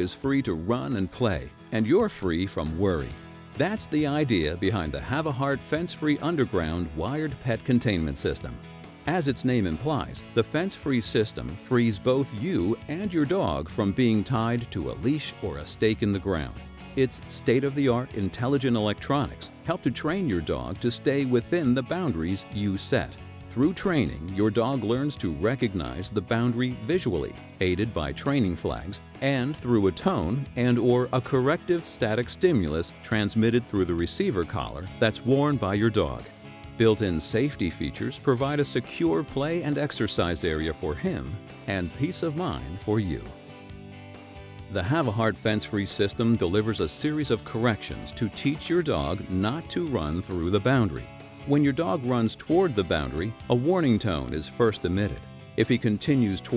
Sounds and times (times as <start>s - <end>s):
Speech: 0.0s - 43.4s, 44.7s - 56.5s
Music: 0.0s - 56.5s.